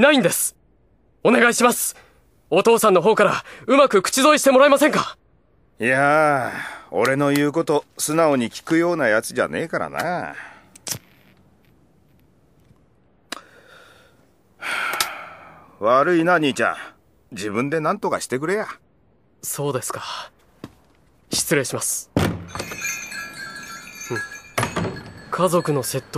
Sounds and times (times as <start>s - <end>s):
Speech: 0.0s - 0.6s, 1.2s - 5.2s, 5.8s - 10.4s, 15.8s - 18.8s, 19.4s - 20.3s, 21.3s - 22.1s, 25.3s - 26.1s.